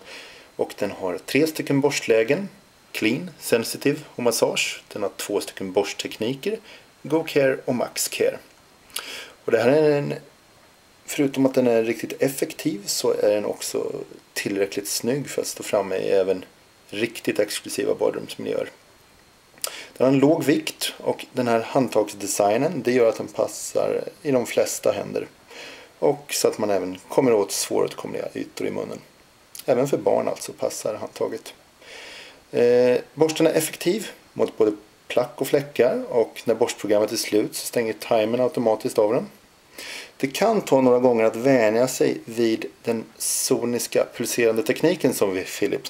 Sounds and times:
Speech: 0:00.6 - 0:08.5, 0:09.4 - 0:10.3, 0:11.1 - 0:18.8, 0:20.0 - 0:25.4, 0:26.0 - 0:31.6, 0:32.5 - 0:39.4, 0:40.2 - 0:45.8.

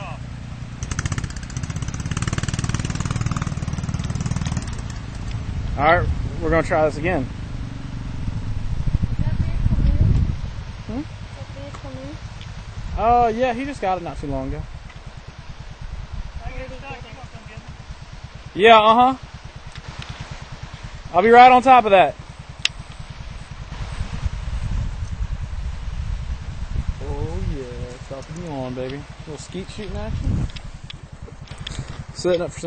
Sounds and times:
Speech: 0:13.0 - 0:14.6, 0:18.6 - 0:19.2, 0:21.1 - 0:22.2, 0:27.0 - 0:30.3, 0:32.2 - 0:32.6.

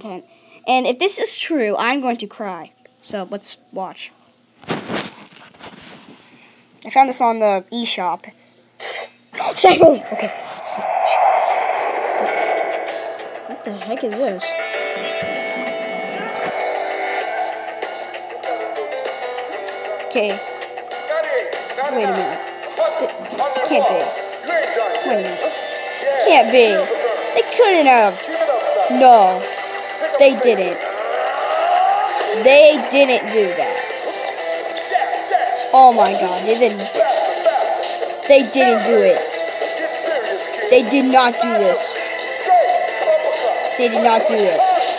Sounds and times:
Speech: 0:09.4 - 0:10.9, 0:13.5 - 0:14.6, 0:26.2 - 0:28.3, 0:28.9 - 0:29.5, 0:30.2 - 0:30.8, 0:32.4 - 0:33.7, 0:35.7 - 0:36.9, 0:38.3 - 0:39.2, 0:40.7 - 0:42.0, 0:43.8 - 0:44.9
Music: 0:13.6 - 0:44.9.

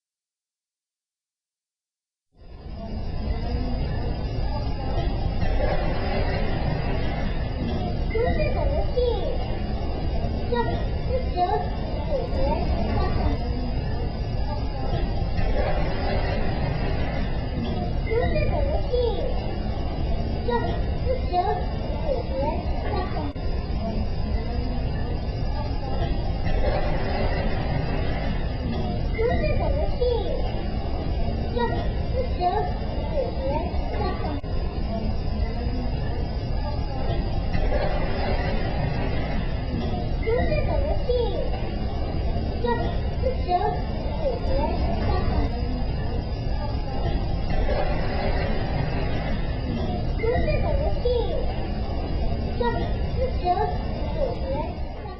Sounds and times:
Speech: 0:07.6 - 0:15.7, 0:17.7 - 0:19.6, 0:20.4 - 0:26.3, 0:28.6 - 0:30.5, 0:31.5 - 0:37.3, 0:40.1 - 0:41.6, 0:42.3 - 0:47.2, 0:49.7 - 0:51.5, 0:52.3 - 0:55.1.

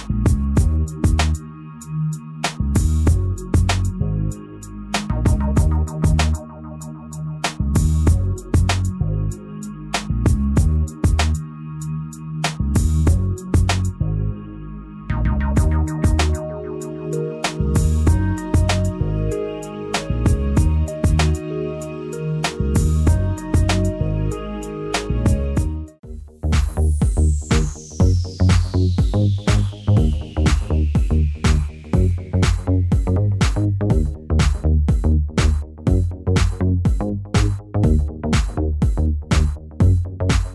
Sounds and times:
Music: 0:00.0 - 0:40.5.

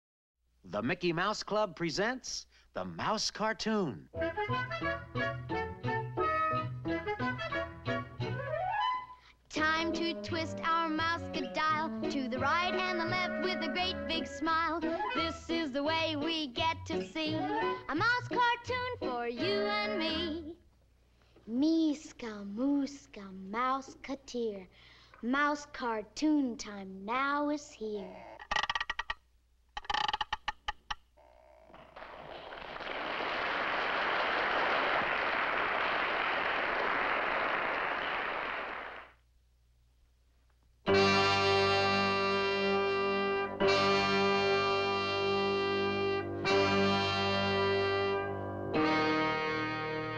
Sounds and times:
Speech: 0:00.7 - 0:04.1, 0:21.5 - 0:28.3.

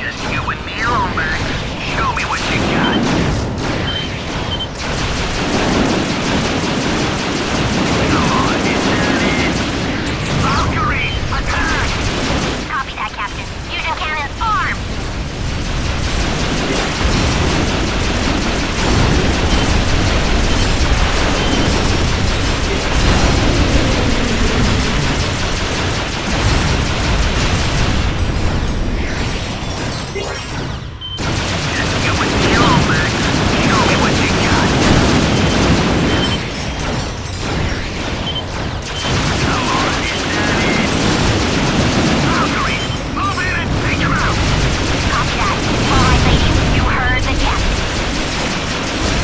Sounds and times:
Speech: 0:00.0 - 0:03.0, 0:08.1 - 0:09.6, 0:10.4 - 0:11.9, 0:12.7 - 0:14.8, 0:30.2 - 0:30.5, 0:32.0 - 0:34.8, 0:39.4 - 0:40.9, 0:42.2 - 0:44.4, 0:45.1 - 0:47.6.

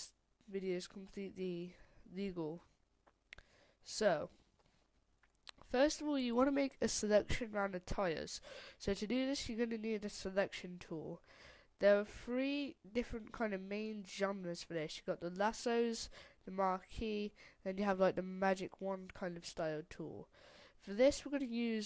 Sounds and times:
Speech: 0:00.0 - 0:02.7, 0:03.9 - 0:04.3, 0:05.6 - 0:11.2, 0:11.8 - 0:21.8.

